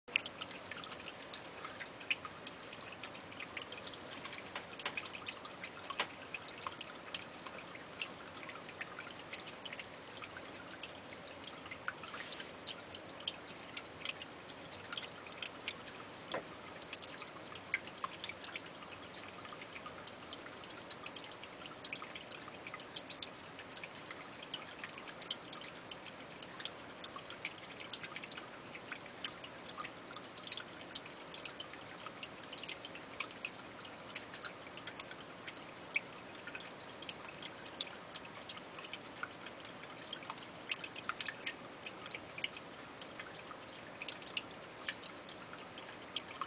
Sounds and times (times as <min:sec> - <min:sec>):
Trickle, dribble: 0:00.0 - 0:46.4.